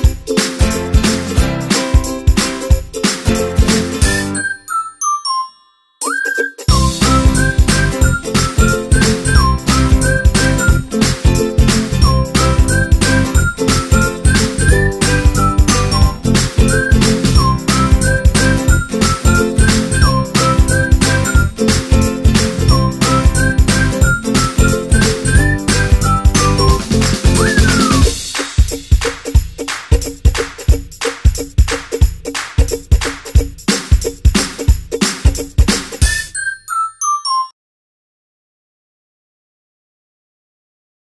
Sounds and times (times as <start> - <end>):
Music: 0.0 - 37.5.